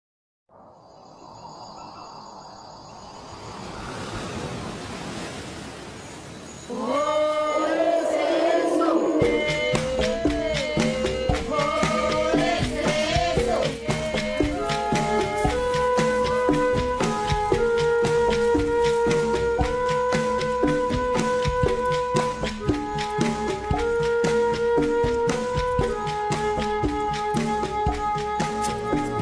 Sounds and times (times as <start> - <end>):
Insect: 0.5 - 22.9
Music: 7.6 - 29.2.